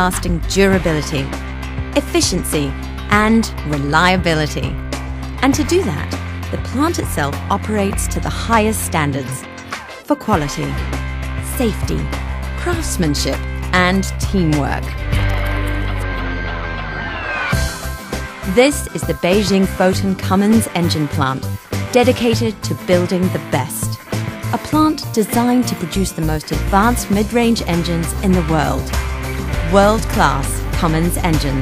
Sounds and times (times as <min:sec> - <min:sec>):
Speech: 0:00.0 - 0:01.4, 0:02.0 - 0:04.8, 0:05.4 - 0:09.4, 0:10.0 - 0:10.8, 0:11.5 - 0:14.9, 0:18.5 - 0:24.0, 0:24.6 - 0:28.9, 0:29.6 - 0:31.6
Music: 0:00.0 - 0:31.6.